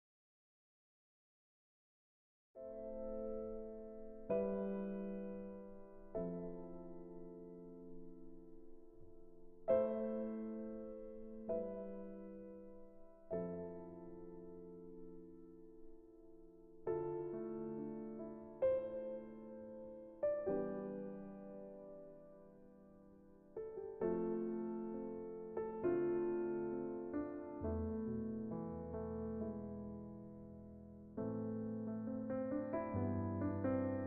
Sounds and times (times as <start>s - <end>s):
Music: 2.6s - 34.0s.